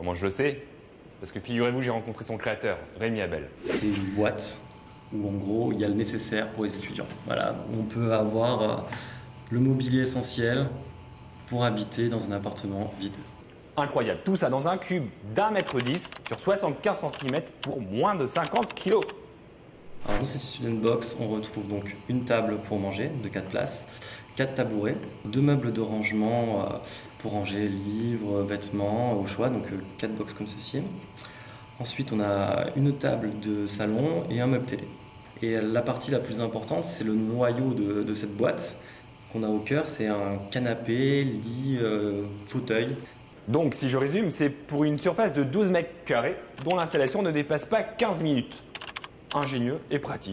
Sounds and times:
Speech: 0.0s - 10.9s, 11.5s - 19.2s, 20.0s - 31.0s, 31.8s - 48.7s, 49.3s - 50.3s.

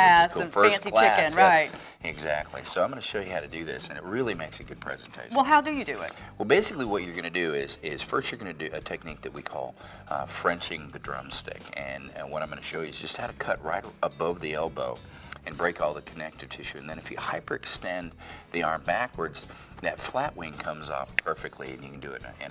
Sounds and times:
Speech: 0.0s - 22.5s.

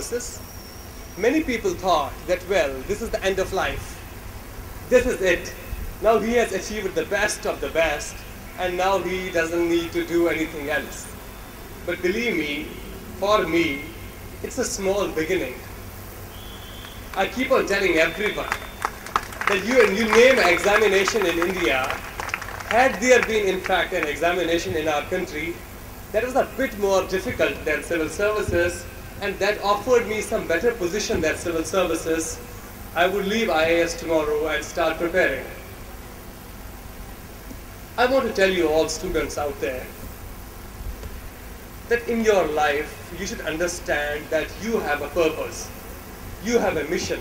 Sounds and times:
Male speech, man speaking: 0.0s - 0.4s, 1.2s - 4.0s, 4.9s - 11.1s, 11.9s - 15.7s, 17.2s - 18.6s, 19.5s - 22.0s, 22.7s - 25.6s, 26.2s - 32.4s, 33.0s - 35.6s, 38.0s - 40.0s, 41.9s - 45.8s, 46.4s - 47.2s.

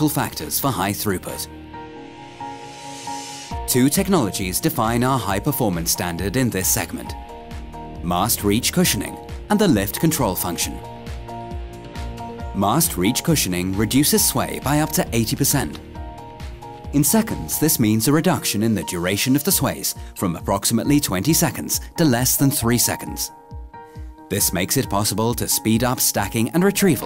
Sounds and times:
Speech: 0.0s - 1.5s, 3.7s - 7.2s, 8.0s - 10.9s, 12.6s - 15.8s, 16.9s - 23.3s, 24.3s - 27.0s
Music: 0.0s - 27.0s.

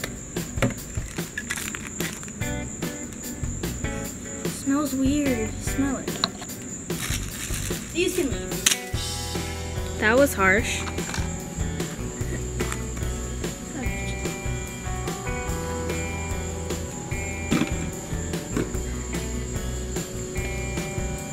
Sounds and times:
Music: 0.0s - 21.3s
Speech: 4.5s - 6.2s, 8.0s - 8.6s, 10.0s - 10.9s, 13.7s - 14.4s.

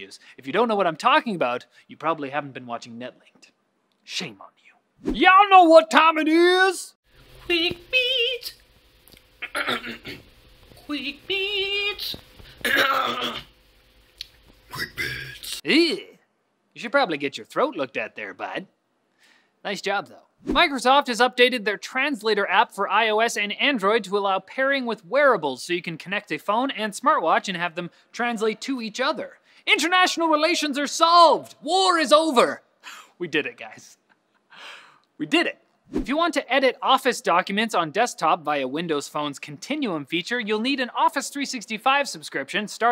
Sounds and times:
Speech: 0.0s - 8.6s, 10.8s - 12.2s, 14.7s - 16.2s, 16.8s - 18.7s, 19.6s - 34.0s, 35.2s - 42.9s.

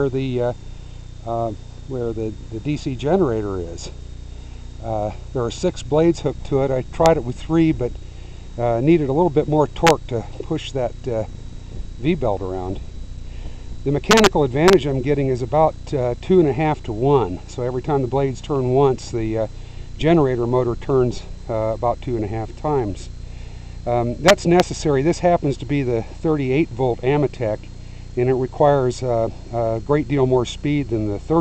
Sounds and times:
Speech: 0.0s - 0.6s, 1.2s - 4.0s, 4.8s - 7.9s, 8.6s - 11.3s, 12.0s - 12.8s, 13.8s - 23.2s, 23.8s - 31.4s.

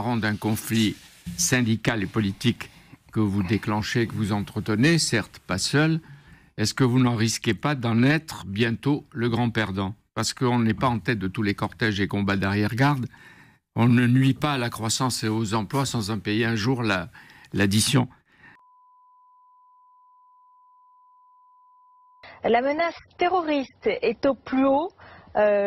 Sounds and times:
Speech: 0.0s - 6.0s, 6.6s - 13.1s, 13.8s - 18.2s, 22.4s - 25.6s.

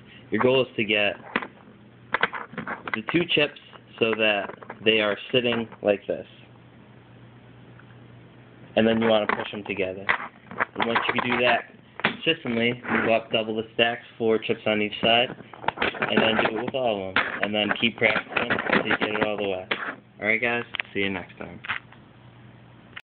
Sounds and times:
Speech: 0.3s - 1.2s, 3.0s - 6.5s, 8.8s - 10.1s, 10.8s - 15.4s, 16.0s - 21.7s.

